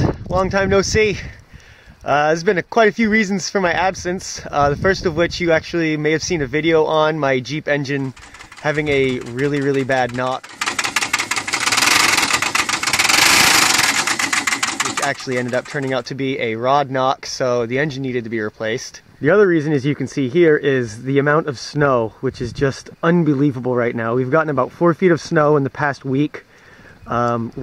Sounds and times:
Speech: 0.0 - 1.4, 2.1 - 10.4, 14.9 - 26.4, 27.1 - 27.6
Engine: 8.0 - 16.1
Vehicle: 8.0 - 16.1.

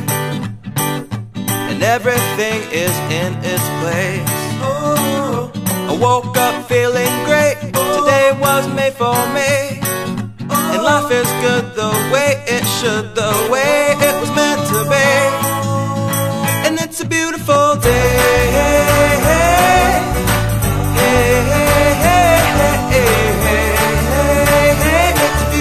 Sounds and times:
Music: 0.0 - 25.6.

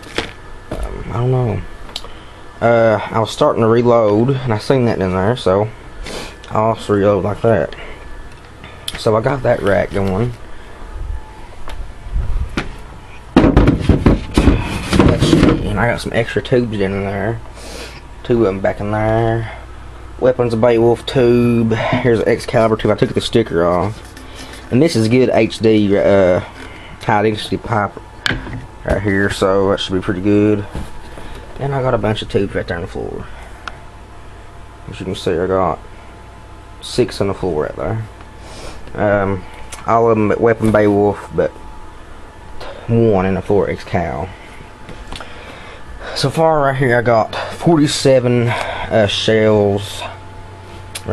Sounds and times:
Speech: 0.8 - 1.7, 2.6 - 5.8, 6.5 - 7.9, 8.9 - 10.4, 14.9 - 17.4, 18.2 - 19.6, 20.2 - 24.0, 24.7 - 28.0, 28.8 - 30.8, 31.6 - 33.4, 34.9 - 35.8, 36.8 - 38.1, 38.9 - 41.6, 42.6 - 44.4, 46.1 - 50.2.

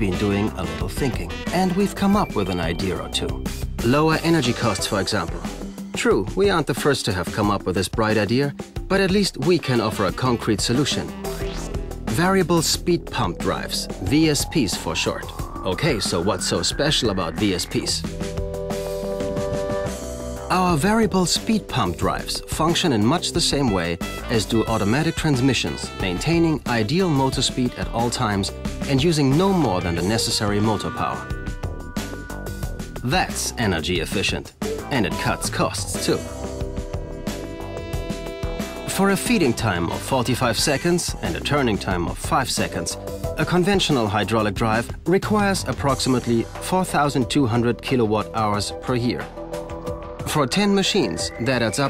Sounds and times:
Speech: 0.0 - 11.2, 12.1 - 18.1, 20.5 - 31.3, 33.0 - 36.3, 38.9 - 49.3, 50.2 - 51.9
Music: 0.0 - 51.9.

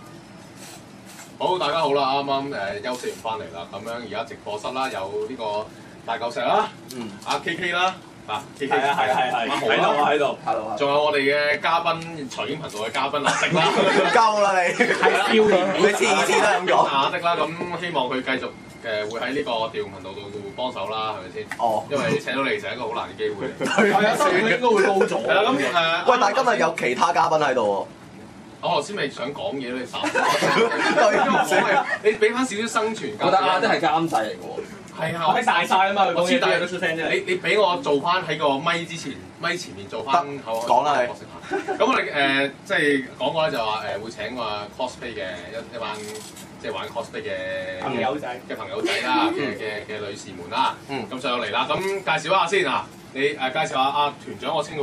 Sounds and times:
Speech: 1.4 - 27.9, 28.6 - 54.8.

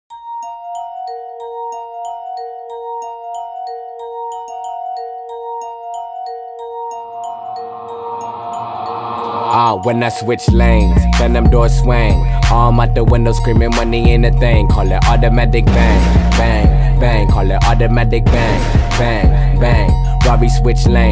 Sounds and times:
Glockenspiel: 0.1 - 21.1.

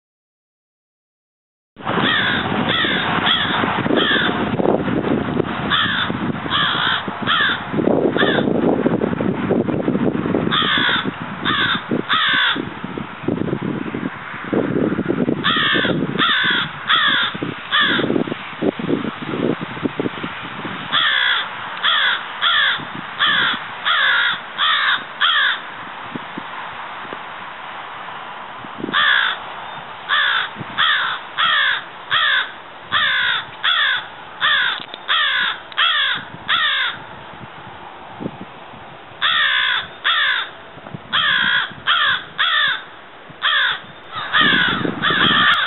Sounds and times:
Caw: 2.0 - 4.4, 5.7 - 7.6, 8.2 - 8.5, 10.5 - 12.6, 15.4 - 18.1, 20.9 - 25.6, 28.9 - 29.4, 30.1 - 37.0, 39.2 - 40.5, 41.1 - 45.6.

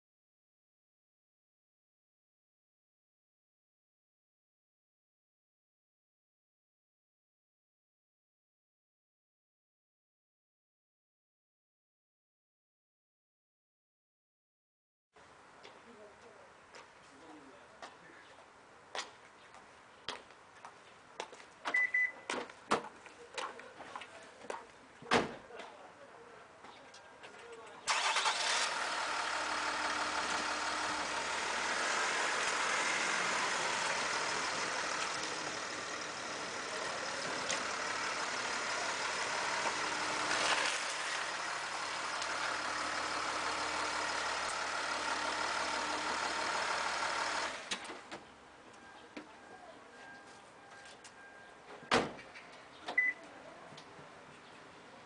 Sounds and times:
Car: 27.9 - 53.3.

